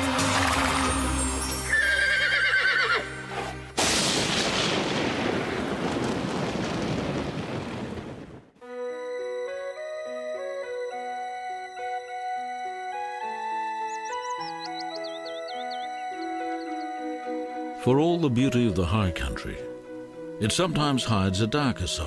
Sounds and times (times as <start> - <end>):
Music: 0.0 - 3.8, 8.6 - 22.0
Outside, rural or natural: 0.0 - 22.0.